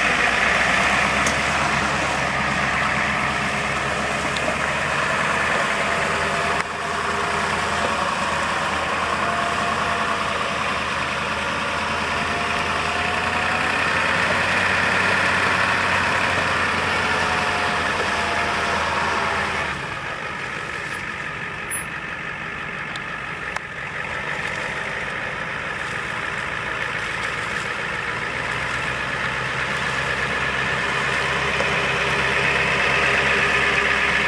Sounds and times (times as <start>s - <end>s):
Vehicle: 0.0s - 34.2s.